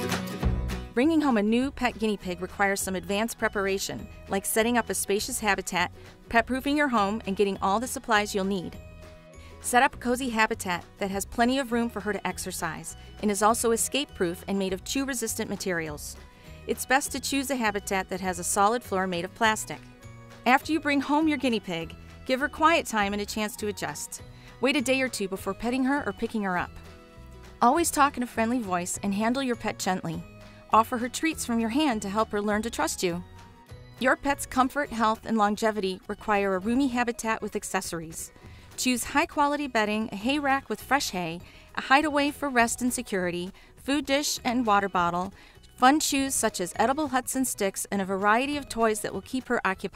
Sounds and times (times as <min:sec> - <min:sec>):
Music: 0:00.0 - 0:49.9
Speech: 0:01.0 - 0:08.8, 0:09.6 - 0:19.8, 0:20.5 - 0:26.8, 0:27.6 - 0:33.2, 0:34.0 - 0:49.9.